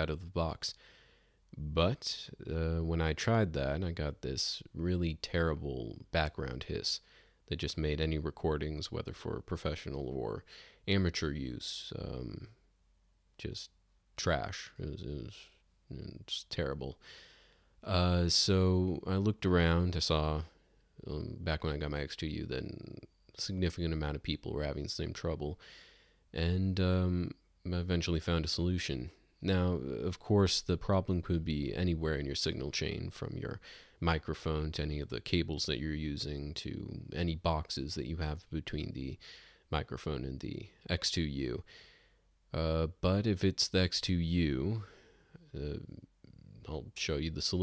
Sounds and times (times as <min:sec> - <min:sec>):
Speech: 0:00.0 - 0:00.8, 0:01.5 - 0:12.6, 0:13.4 - 0:17.0, 0:17.8 - 0:25.6, 0:26.3 - 0:41.7, 0:42.5 - 0:47.6.